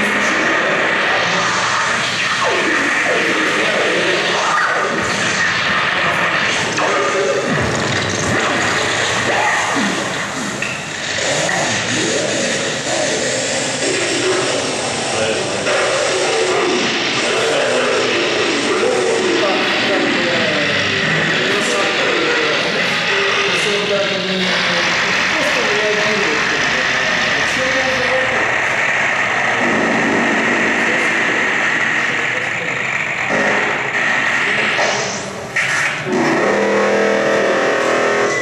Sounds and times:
Speech: 0:00.0 - 0:05.1, 0:05.8 - 0:07.7, 0:08.3 - 0:10.5, 0:11.2 - 0:28.8, 0:29.4 - 0:35.2.

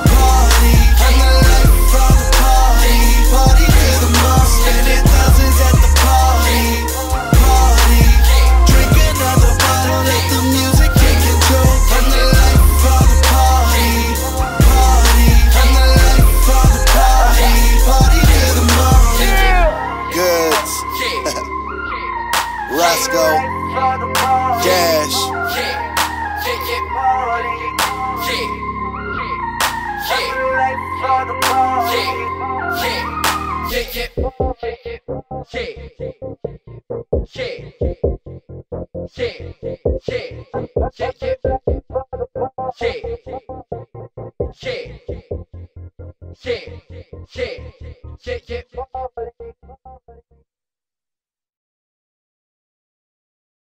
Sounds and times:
Hip hop music: 0:00.0 - 0:38.2, 0:39.0 - 0:45.5.

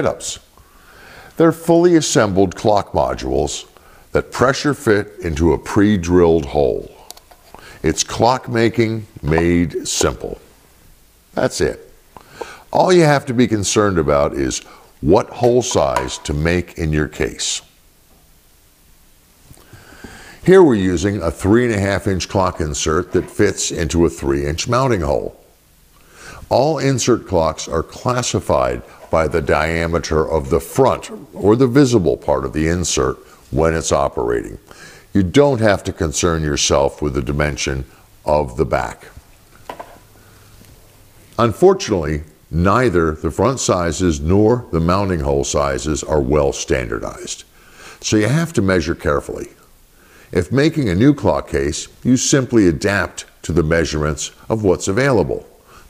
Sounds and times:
Speech: 0:00.0 - 0:00.5, 0:01.4 - 0:07.1, 0:07.8 - 0:10.4, 0:11.4 - 0:11.9, 0:12.7 - 0:17.7, 0:20.4 - 0:25.4, 0:26.5 - 0:39.2, 0:41.4 - 0:49.6, 0:50.3 - 0:55.6.

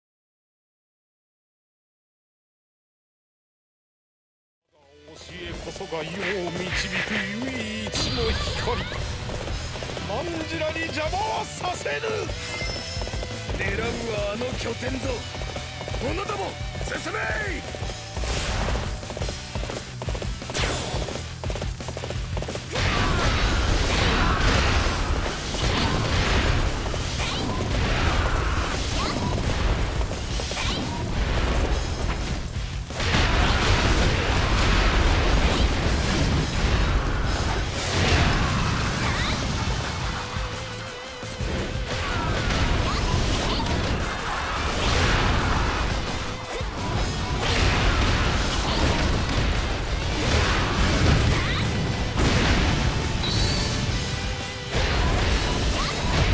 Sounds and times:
Music: 0:04.7 - 0:56.3.

